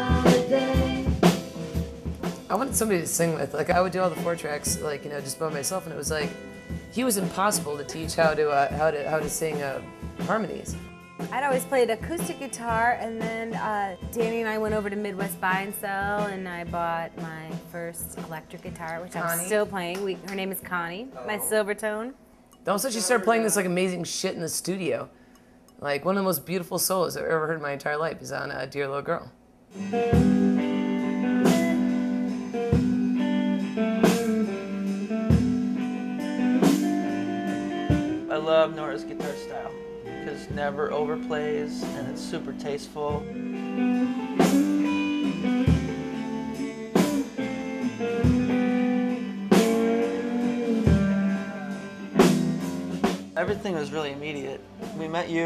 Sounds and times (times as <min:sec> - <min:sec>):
Music: 0:00.0 - 0:27.2, 0:29.7 - 0:55.4
Speech: 0:02.5 - 0:06.3, 0:07.0 - 0:10.8, 0:11.4 - 0:22.1, 0:22.7 - 0:25.1, 0:38.3 - 0:43.2, 0:53.4 - 0:55.4.